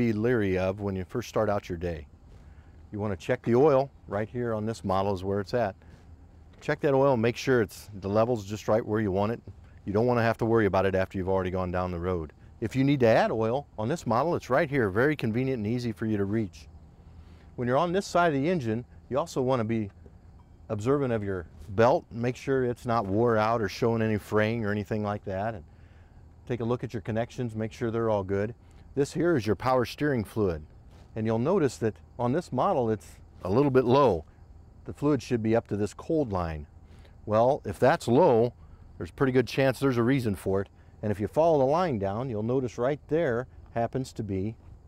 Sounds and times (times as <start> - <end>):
Speech: 0.0 - 2.1, 2.9 - 5.8, 6.6 - 16.7, 17.6 - 20.0, 20.7 - 25.7, 26.5 - 36.7, 37.3 - 44.6.